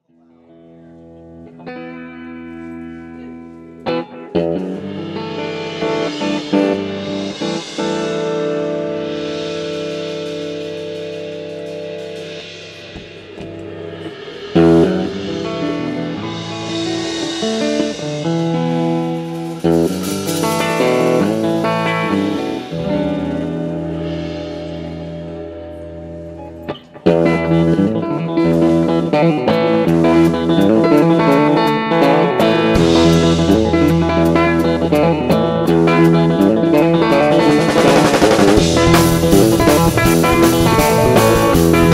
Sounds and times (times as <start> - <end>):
Bass guitar: 0.0 - 41.9
Electric guitar: 0.0 - 41.9.